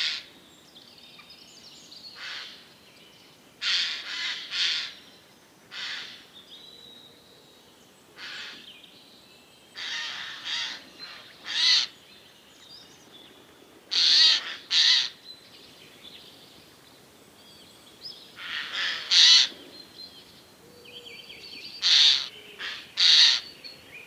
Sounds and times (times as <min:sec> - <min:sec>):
Bird vocalization, bird call, bird song: 0:00.0 - 0:03.4, 0:04.8 - 0:13.7, 0:14.6 - 0:24.0.